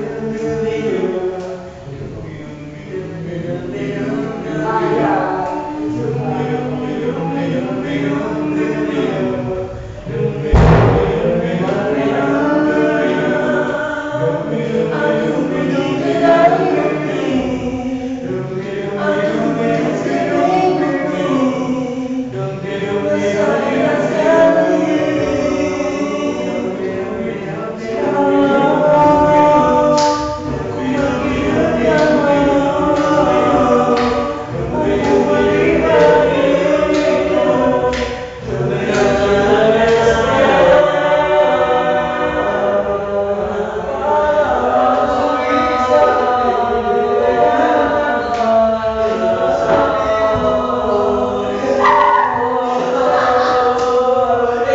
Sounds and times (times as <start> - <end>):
Male singing: 0.0 - 54.7.